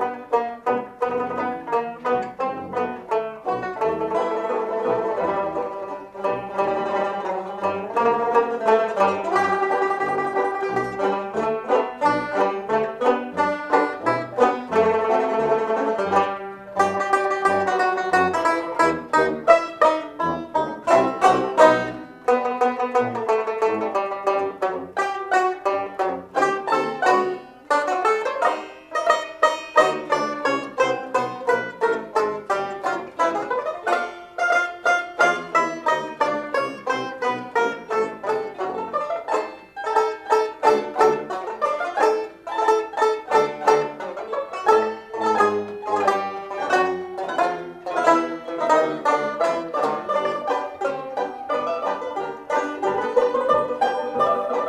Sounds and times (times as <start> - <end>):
Orchestra: 0.0 - 54.6.